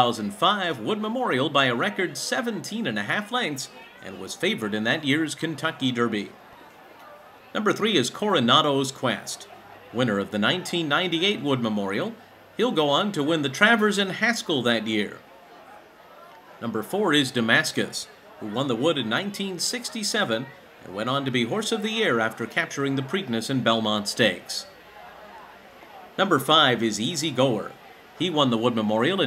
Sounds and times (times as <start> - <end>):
Speech: 0.0 - 15.3, 16.6 - 29.2.